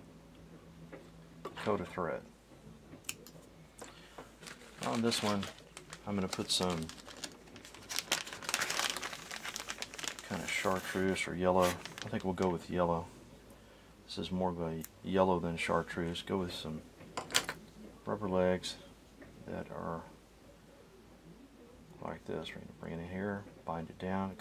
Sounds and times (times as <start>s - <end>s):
Speech: 1.6s - 2.3s, 4.8s - 7.0s, 10.2s - 13.2s, 14.1s - 16.8s, 18.0s - 20.2s, 22.0s - 24.4s.